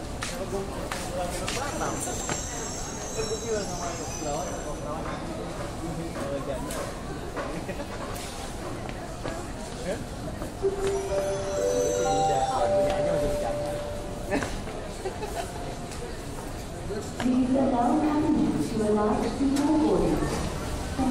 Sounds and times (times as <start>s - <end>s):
Railroad car, train wagon: 0.0s - 21.1s
Subway, metro, underground: 0.0s - 21.1s
Train: 0.0s - 21.1s.